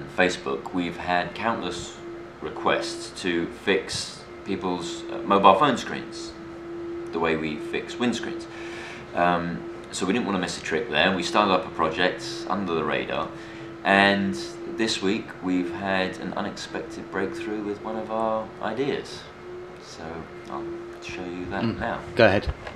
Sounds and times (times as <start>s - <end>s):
Speech: 0.0s - 6.4s, 7.1s - 8.5s, 9.1s - 22.5s.